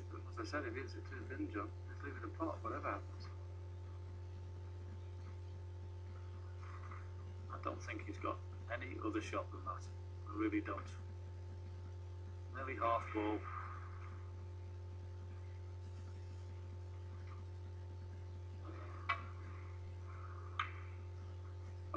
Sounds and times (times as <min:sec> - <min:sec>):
Speech: 0:00.0 - 0:03.3, 0:07.5 - 0:11.0, 0:12.5 - 0:13.5.